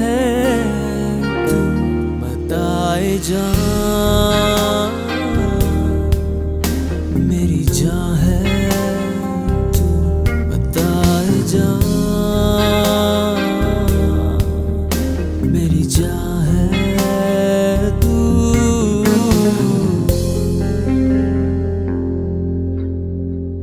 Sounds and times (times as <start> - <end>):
Music: 0.0 - 23.6.